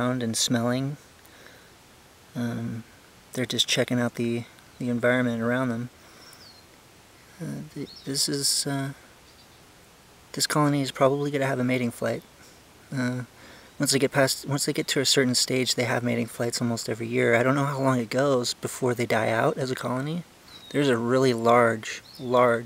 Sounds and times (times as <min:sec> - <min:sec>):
Speech: 0:00.0 - 0:01.0, 0:02.4 - 0:05.9, 0:07.4 - 0:09.0, 0:10.3 - 0:12.3, 0:12.9 - 0:22.6.